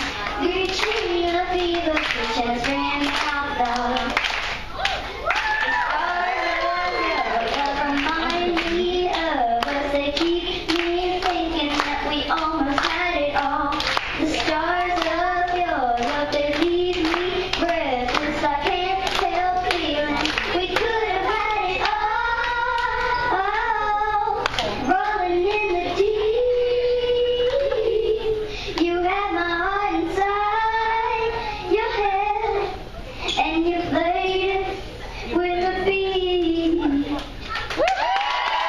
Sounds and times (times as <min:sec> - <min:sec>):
Child singing: 0:00.0 - 0:04.3, 0:05.8 - 0:37.2.